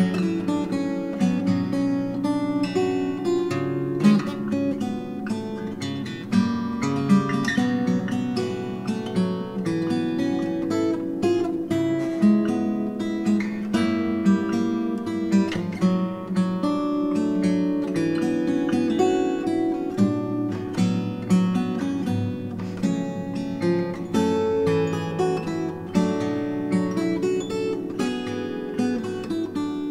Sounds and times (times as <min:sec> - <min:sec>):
Acoustic guitar: 0:00.0 - 0:29.9.